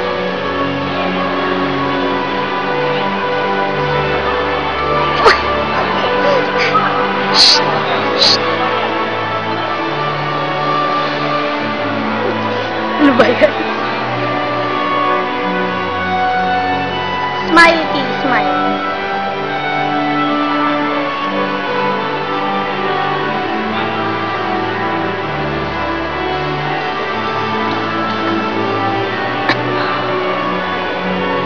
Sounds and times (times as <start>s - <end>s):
Music: 0.0s - 31.4s.